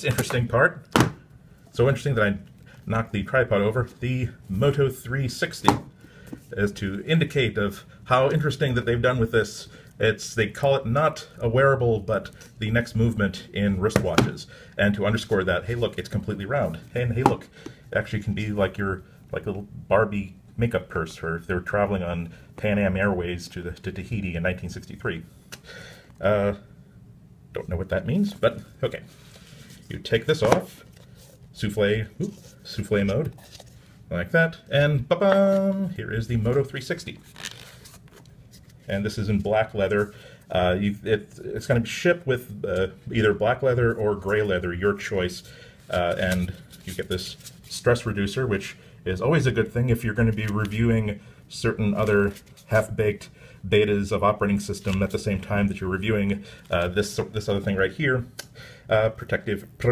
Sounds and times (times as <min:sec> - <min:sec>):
Speech: 0:00.0 - 0:00.9, 0:01.7 - 0:05.9, 0:06.5 - 0:25.3, 0:26.2 - 0:26.7, 0:27.5 - 0:29.1, 0:29.9 - 0:30.8, 0:31.5 - 0:33.4, 0:34.1 - 0:37.2, 0:38.9 - 0:58.3, 0:58.9 - 0:59.9
Inside, small room: 0:00.0 - 0:59.9.